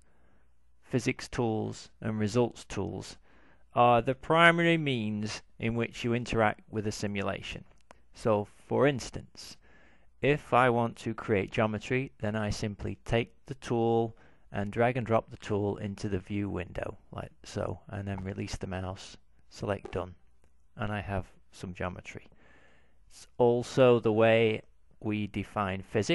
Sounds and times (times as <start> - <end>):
Speech: 0.9 - 9.6, 10.2 - 20.2, 20.8 - 22.3, 23.1 - 26.1.